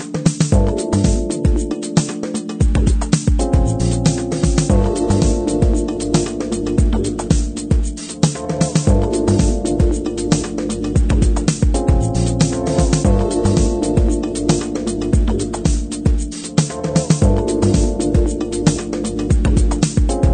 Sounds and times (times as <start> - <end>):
Music: 0.0 - 20.3.